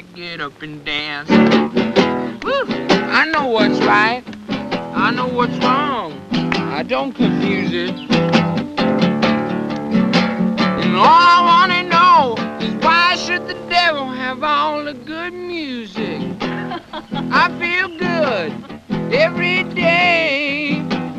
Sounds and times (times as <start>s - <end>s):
Music: 0.0s - 21.1s.